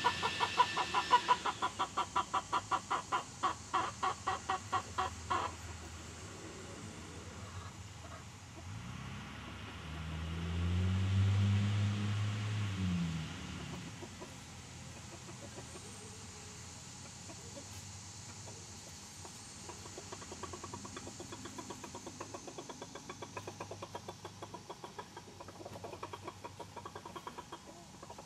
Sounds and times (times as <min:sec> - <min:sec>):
Outside, rural or natural: 0:00.0 - 0:28.2.